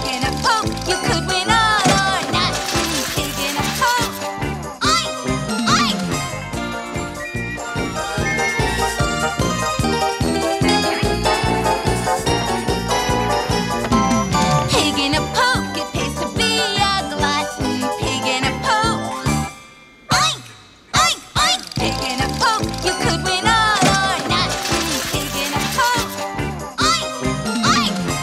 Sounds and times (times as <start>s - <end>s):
Music: 0.0s - 28.2s.